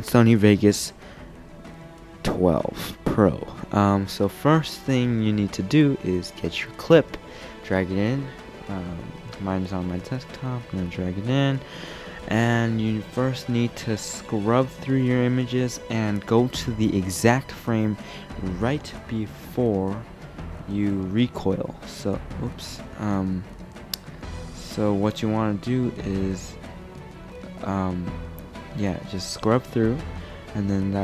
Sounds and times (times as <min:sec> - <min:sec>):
Speech: 0:00.0 - 0:01.0, 0:02.2 - 0:20.0, 0:20.7 - 0:23.4, 0:24.6 - 0:26.6, 0:27.6 - 0:31.0
Music: 0:00.0 - 0:31.0.